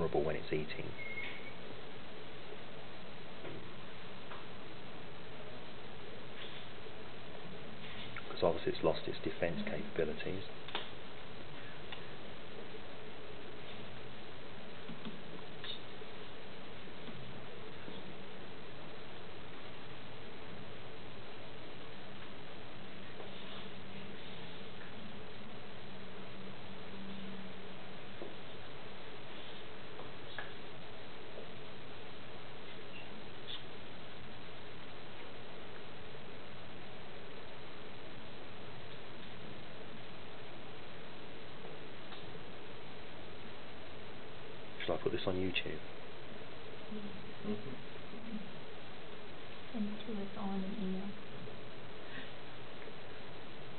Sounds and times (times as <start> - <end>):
Speech: 0.0 - 1.0, 8.3 - 10.5, 44.8 - 45.8, 49.8 - 51.2
Inside, small room: 0.0 - 53.7.